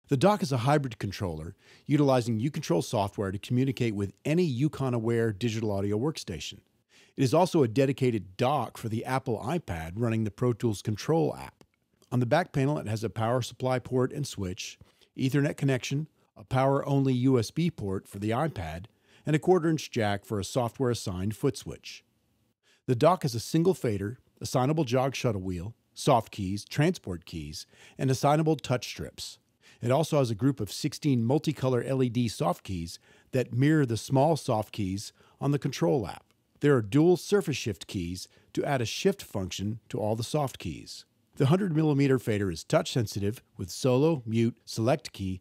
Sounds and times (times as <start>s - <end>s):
Speech: 0.0s - 22.0s, 22.9s - 45.4s.